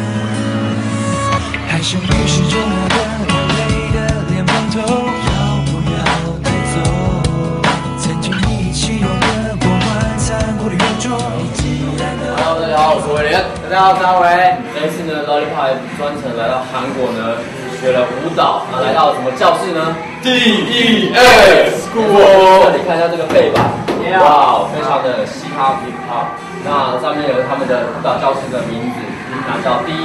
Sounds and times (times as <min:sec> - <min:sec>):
Soundtrack music: 0:00.0 - 0:13.8.